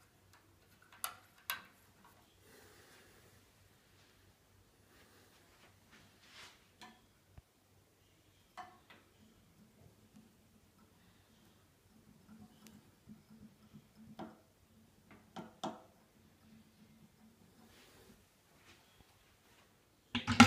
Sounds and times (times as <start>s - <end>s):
Inside, small room: 0.0s - 20.4s
Silence: 1.7s - 15.2s.